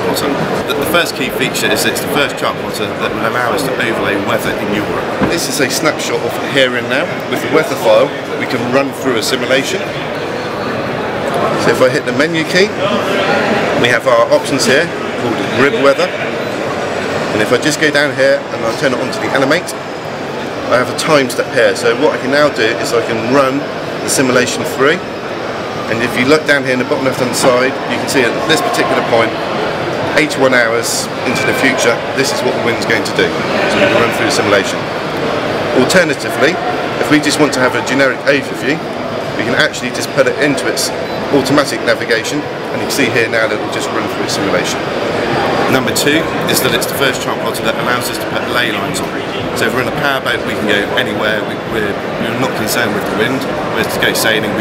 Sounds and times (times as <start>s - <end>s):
Speech: 0.0s - 9.9s, 20.7s - 25.0s, 25.9s - 29.3s, 30.1s - 34.8s, 35.8s - 38.8s, 39.4s - 44.8s, 45.7s - 54.6s.